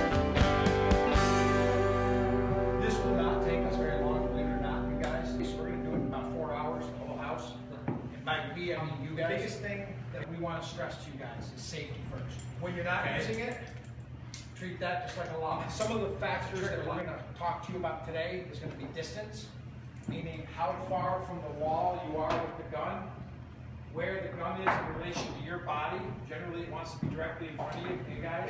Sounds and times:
Speech: 2.8 - 13.7, 14.6 - 23.2, 23.9 - 28.4.

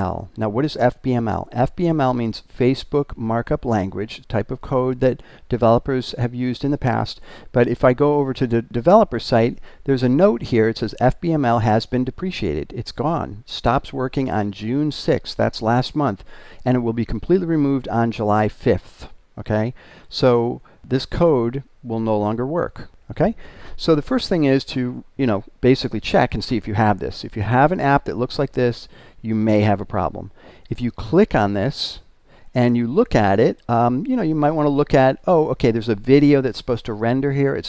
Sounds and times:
Speech: 0.0 - 37.6.

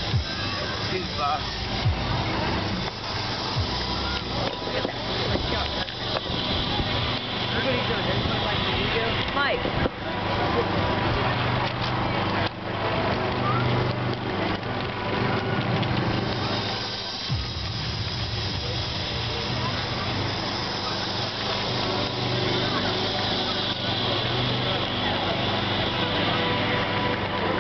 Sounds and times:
Speech: 0.0 - 17.6, 18.5 - 27.6.

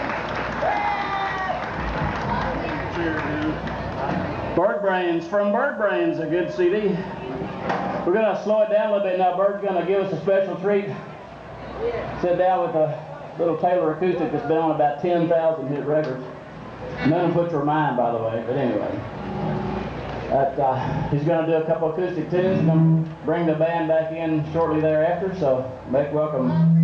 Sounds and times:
Speech: 2.4 - 7.0, 8.1 - 11.0, 17.0 - 19.0, 20.3 - 26.8.

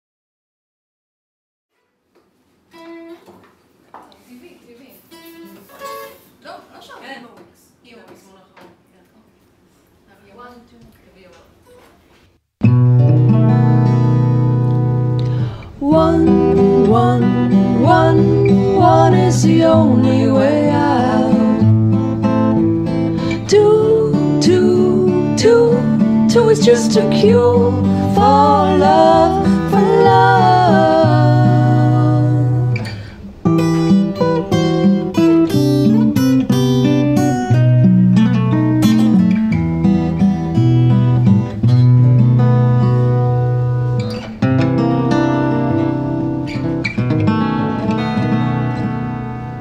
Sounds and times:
Acoustic guitar: 1.7 - 3.6, 4.8 - 7.4, 11.6 - 49.6.

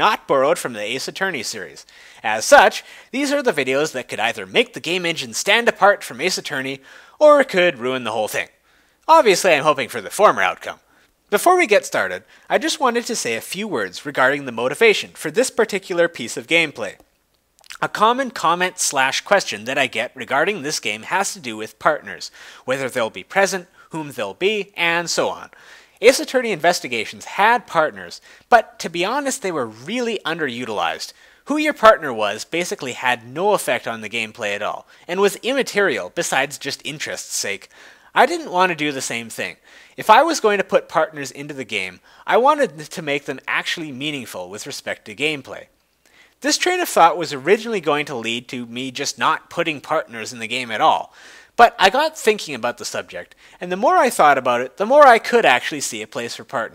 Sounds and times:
Speech: 0.0 - 17.0, 17.6 - 45.7, 46.4 - 56.7.

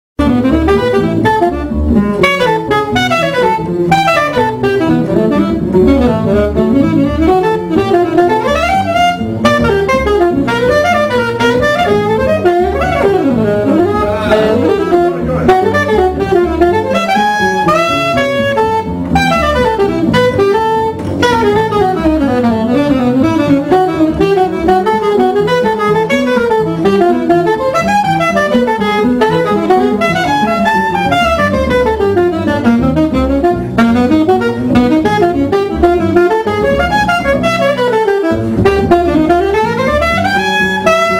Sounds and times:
Brass instrument: 0.2 - 41.1
Saxophone: 0.2 - 41.1.

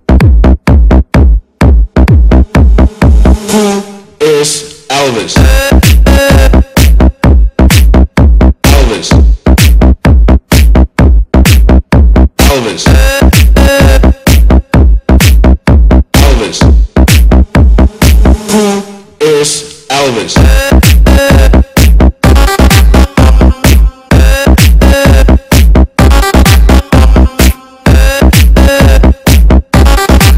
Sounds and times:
Music: 0.0 - 3.7, 4.7 - 18.7, 19.7 - 30.3.

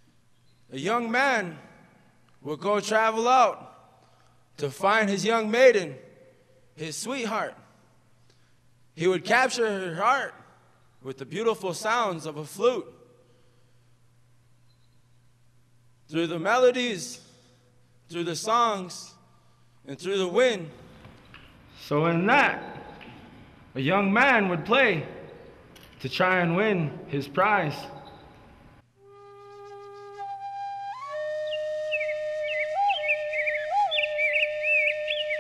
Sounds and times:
Speech: 0.7 - 1.7, 2.4 - 3.7, 4.6 - 6.0, 6.8 - 7.6, 9.0 - 10.4, 11.0 - 13.0, 16.1 - 17.2, 18.1 - 19.2, 19.9 - 20.8, 21.8 - 22.8, 23.8 - 25.2, 26.0 - 28.0.

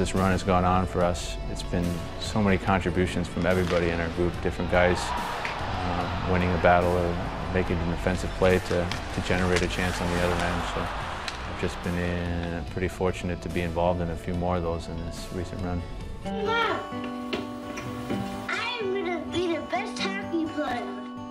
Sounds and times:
Music: 0.0 - 21.3
Speech: 5.9 - 10.9.

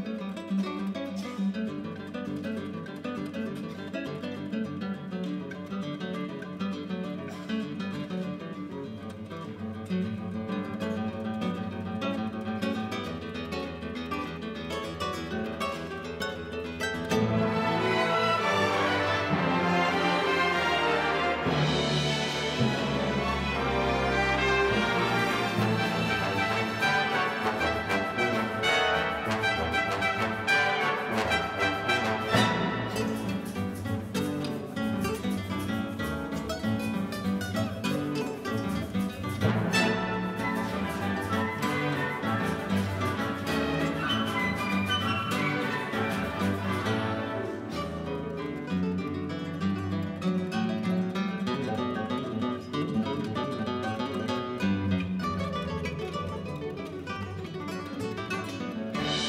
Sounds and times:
Acoustic guitar: 0.0 - 59.2
Orchestra: 0.0 - 59.2
Strum: 8.8 - 59.2.

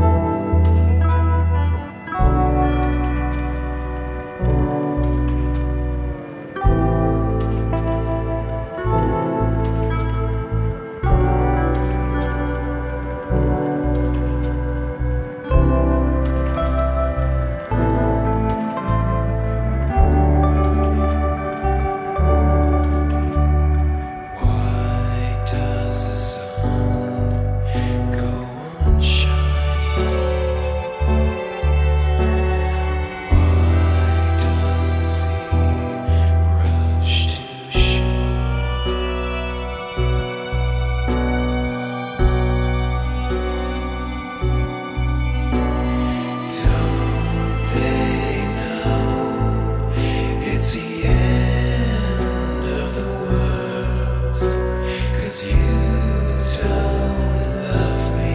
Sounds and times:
Music: 0.0 - 58.3.

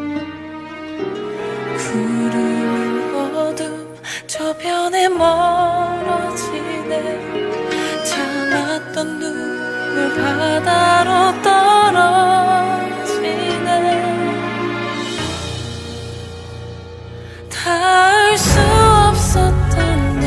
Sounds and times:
Music: 0.0 - 20.2.

